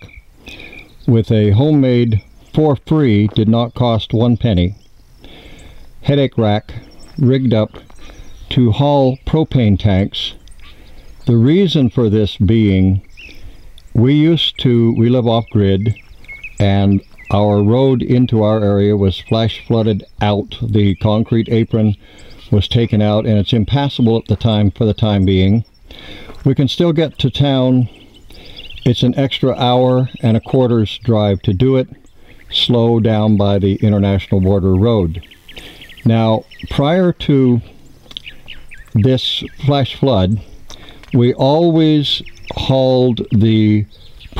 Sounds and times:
Speech: 1.1s - 4.8s, 6.0s - 7.8s, 8.5s - 10.4s, 11.3s - 13.1s, 14.0s - 16.0s, 16.6s - 25.7s, 26.4s - 28.0s, 28.8s - 35.2s, 36.0s - 37.7s, 39.0s - 40.5s, 41.2s - 44.3s.

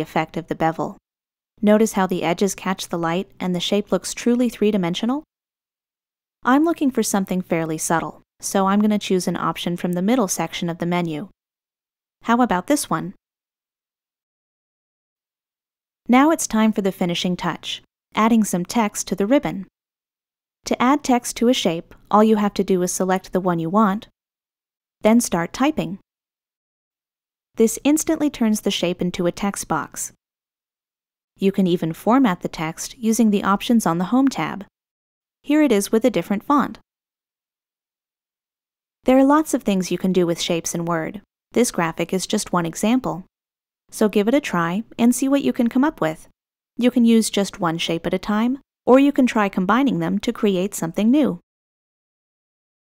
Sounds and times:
Speech: 0.0s - 1.0s, 1.6s - 5.3s, 6.4s - 11.3s, 12.2s - 13.2s, 16.1s - 19.7s, 20.7s - 24.1s, 25.0s - 26.0s, 27.6s - 30.2s, 31.4s - 34.7s, 35.5s - 36.8s, 39.1s - 43.3s, 44.0s - 51.4s.

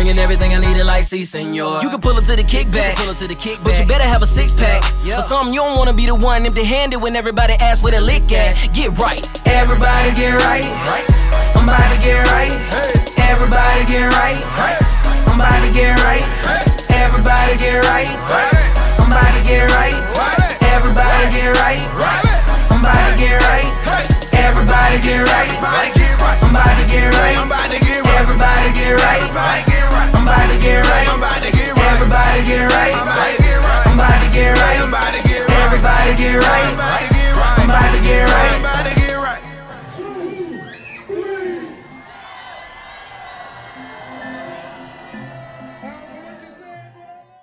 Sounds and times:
Music: 0.0s - 47.4s.

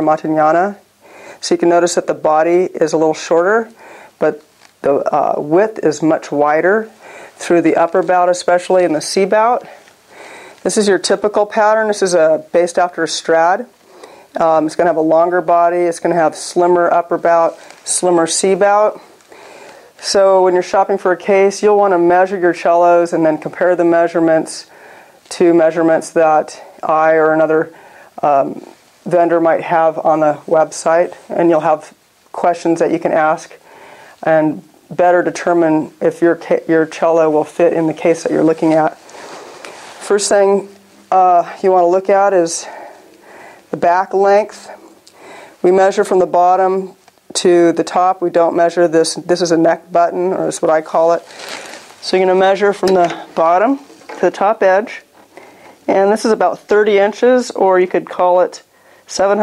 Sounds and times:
Speech: 0.0s - 9.8s, 10.6s - 13.7s, 14.4s - 19.1s, 20.0s - 24.7s, 25.3s - 33.6s, 34.2s - 39.0s, 40.0s - 42.9s, 43.7s - 44.8s, 45.6s - 51.3s, 52.0s - 55.1s, 55.9s - 59.4s.

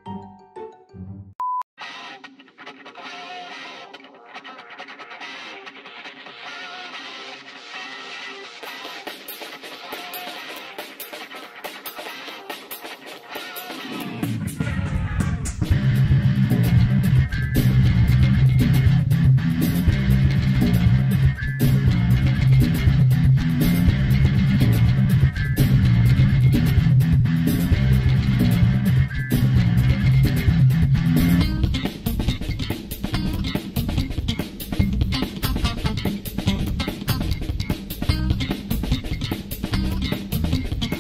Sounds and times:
Music: 0.0s - 41.0s.

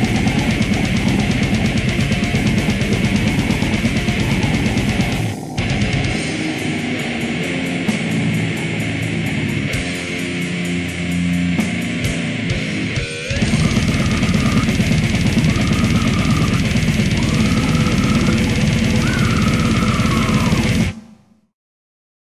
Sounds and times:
Music: 0.0s - 21.2s.

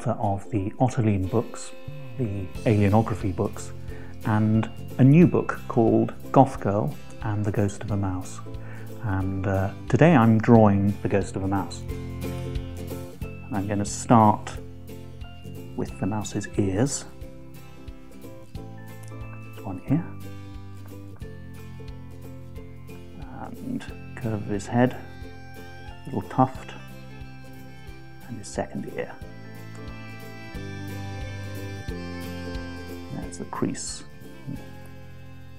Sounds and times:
Speech: 0.0s - 3.7s, 4.3s - 8.4s, 9.0s - 11.8s, 15.8s - 17.1s, 19.6s - 20.2s, 23.2s - 25.0s, 26.1s - 26.8s, 28.3s - 29.2s, 33.1s - 34.6s
Music: 0.0s - 35.5s.

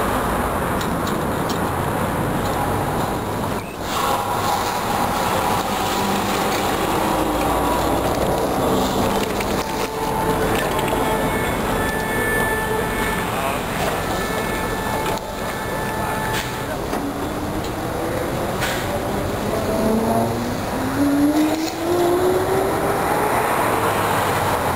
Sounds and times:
Bus: 0.0s - 24.7s.

